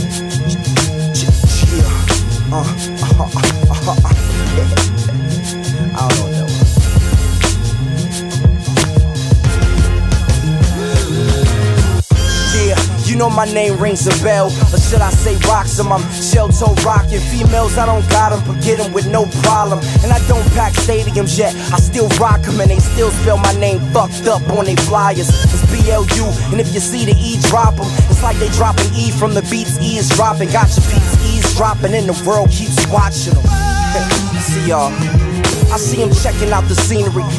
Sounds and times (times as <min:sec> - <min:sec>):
Music: 0:00.0 - 0:37.3.